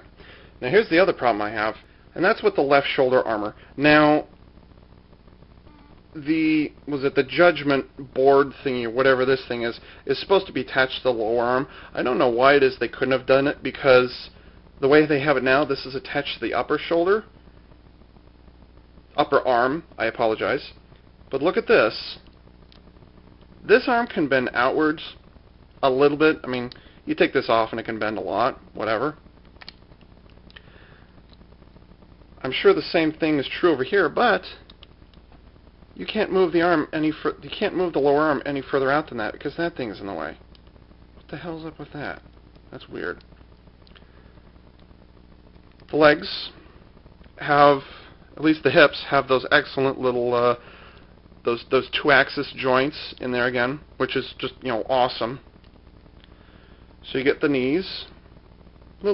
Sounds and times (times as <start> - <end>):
Speech: 0.6 - 4.3, 5.7 - 17.3, 19.2 - 22.3, 23.6 - 25.2, 25.8 - 29.2, 32.4 - 34.7, 36.0 - 40.4, 41.3 - 43.2, 45.9 - 46.6, 47.4 - 50.6, 51.4 - 55.5, 57.0 - 58.2.